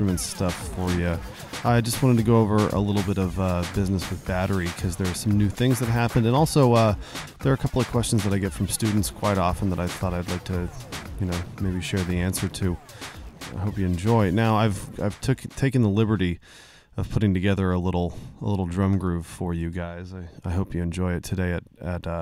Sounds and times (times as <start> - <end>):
Speech: 0.0 - 12.8, 13.5 - 16.4, 17.0 - 22.2.